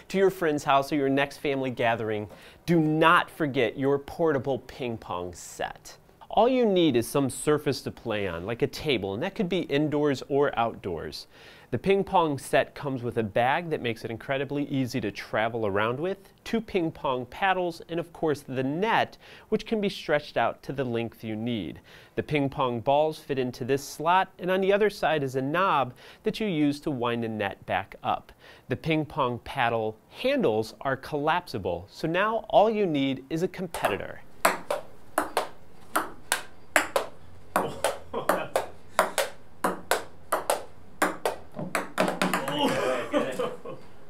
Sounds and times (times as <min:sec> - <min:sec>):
Speech: 0:00.1 - 0:34.2, 0:42.4 - 0:43.6.